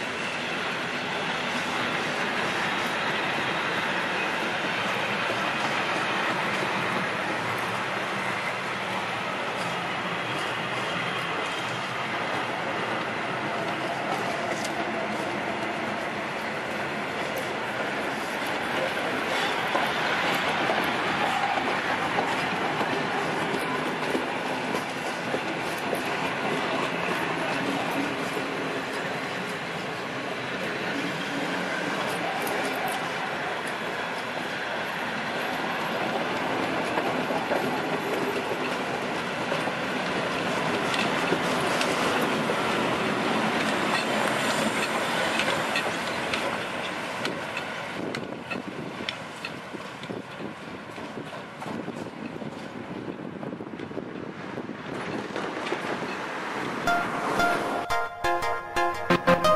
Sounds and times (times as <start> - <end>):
Railroad car, train wagon: 0.0 - 59.5
Train: 0.0 - 59.5
Clickety-clack: 4.1 - 8.7, 9.4 - 56.8.